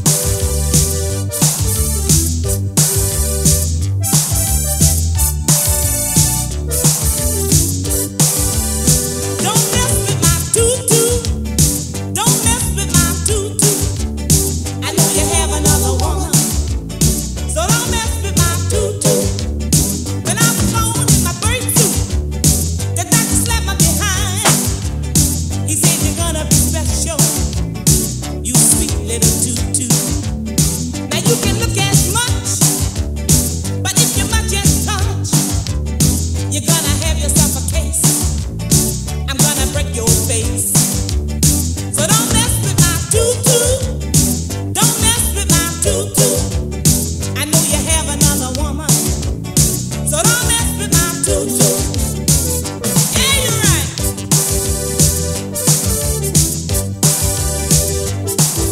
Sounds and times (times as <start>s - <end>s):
Soul music: 0.0s - 58.7s.